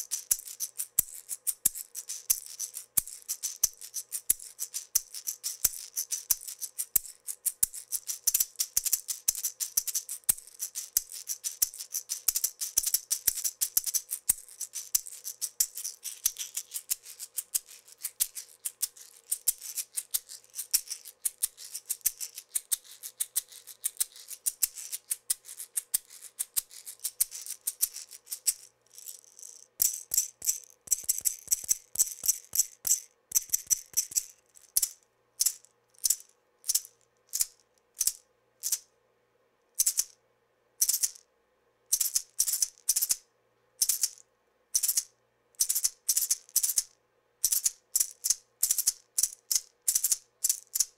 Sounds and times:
Percussion: 0.0 - 38.9, 39.8 - 40.2, 40.8 - 41.2, 41.9 - 43.2, 43.8 - 44.2, 44.8 - 50.9.

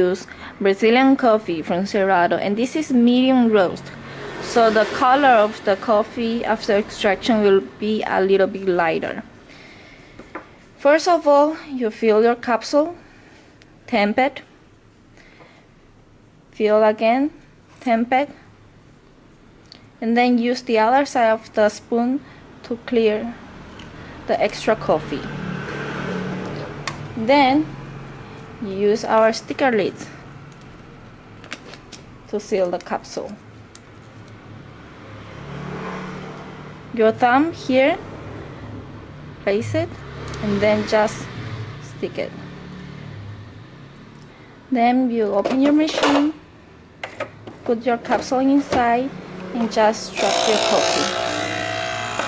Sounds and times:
Speech: 0.0 - 3.9, 4.5 - 9.3, 10.8 - 13.0, 13.9 - 14.5, 16.6 - 18.4, 20.0 - 23.4, 24.3 - 25.3, 27.2 - 27.7, 28.6 - 30.2, 32.3 - 33.4, 37.0 - 38.0, 39.4 - 41.3, 41.9 - 42.4, 44.7 - 46.4, 47.7 - 51.1.

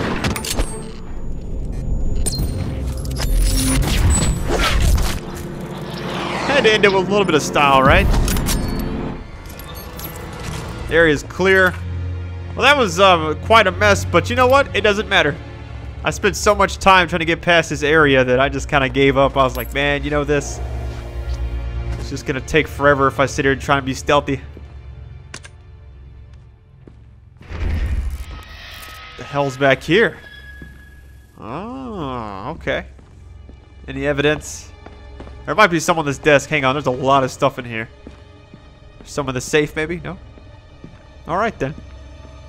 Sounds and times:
Music: 0.0 - 42.4
Speech: 6.5 - 8.0, 29.2 - 30.2, 31.4 - 32.9, 33.9 - 34.7, 35.5 - 37.9, 39.1 - 40.2, 41.3 - 41.8.

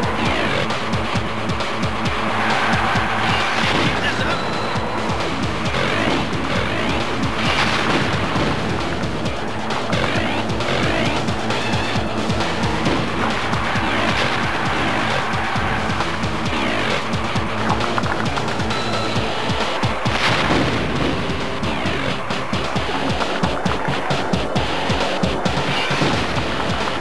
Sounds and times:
Music: 0.0 - 27.0
Speech: 3.3 - 4.8, 10.0 - 11.3.

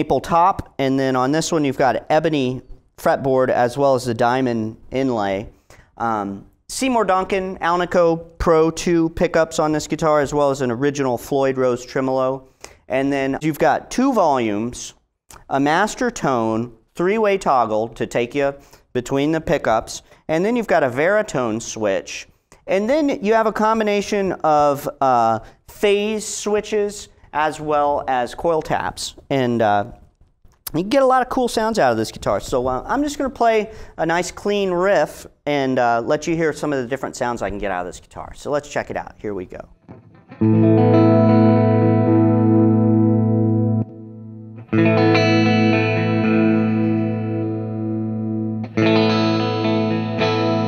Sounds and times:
Speech: 0.0 - 30.0, 30.7 - 39.8.

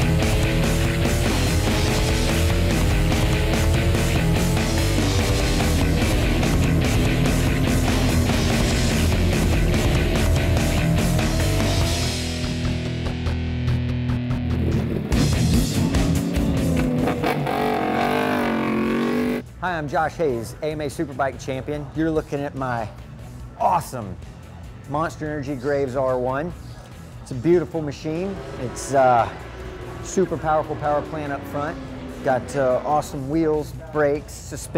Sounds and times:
Motor vehicle (road): 0.0 - 13.4, 14.1 - 34.7
Music: 0.0 - 34.7
Speech: 19.6 - 22.9, 27.3 - 29.4, 30.1 - 34.7.

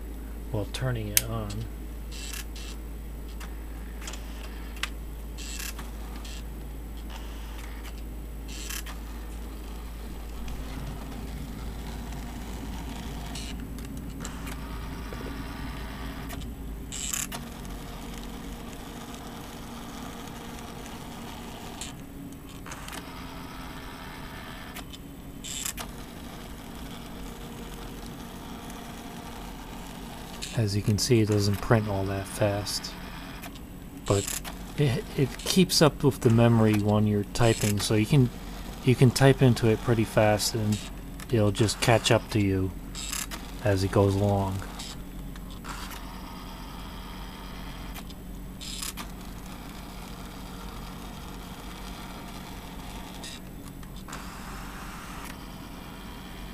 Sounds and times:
Speech: 0.5 - 1.7, 30.6 - 33.0, 34.8 - 42.7, 43.6 - 44.6
Printer: 1.4 - 56.5.

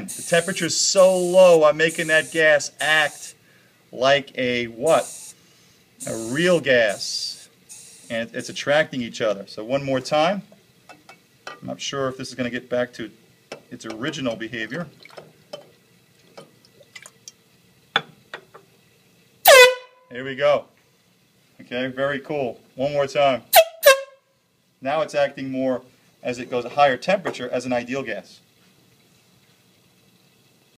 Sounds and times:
Speech: 0.0 - 3.4, 4.0 - 5.1, 6.0 - 7.4, 8.1 - 10.5, 11.6 - 14.9, 20.1 - 20.7, 21.6 - 23.5, 24.8 - 28.4
Liquid: 0.0 - 30.7
Water: 0.0 - 30.7
Air horn, truck horn: 19.4 - 20.1, 23.5 - 24.3.

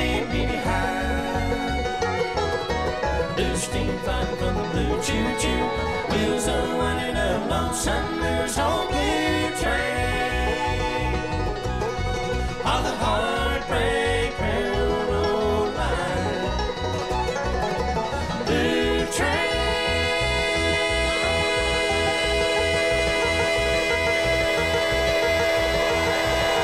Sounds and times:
Bluegrass: 0.0 - 26.6.

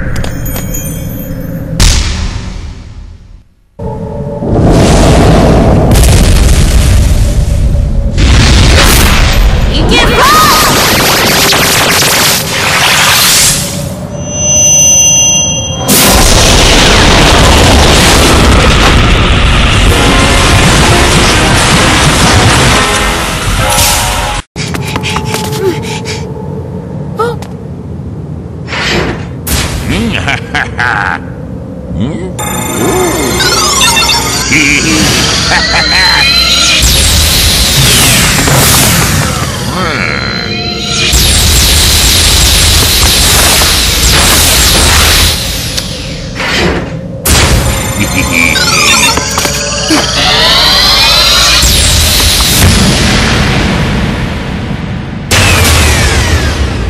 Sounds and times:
Speech: 9.7 - 10.7.

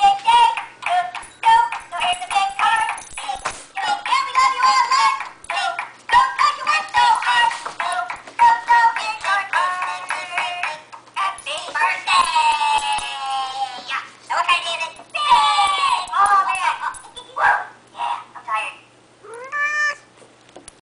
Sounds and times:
Meow: 19.2 - 20.1.

